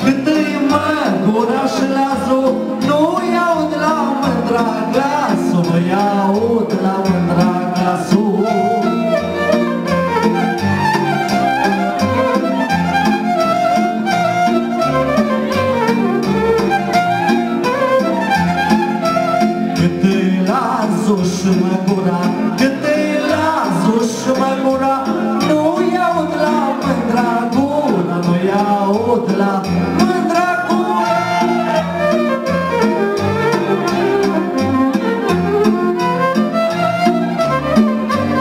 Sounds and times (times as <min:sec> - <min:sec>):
Music: 0:00.0 - 0:38.4.